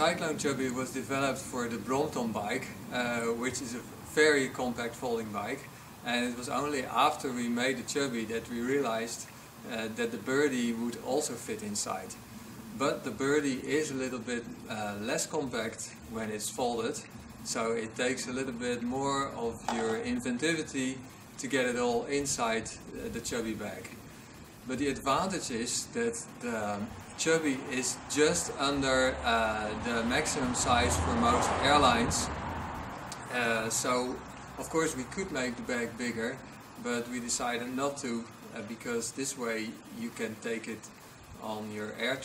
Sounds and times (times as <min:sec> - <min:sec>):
Speech: 0:00.0 - 0:12.2, 0:12.8 - 0:24.0, 0:24.7 - 0:32.3, 0:33.2 - 0:42.2
Vehicle: 0:26.2 - 0:42.2.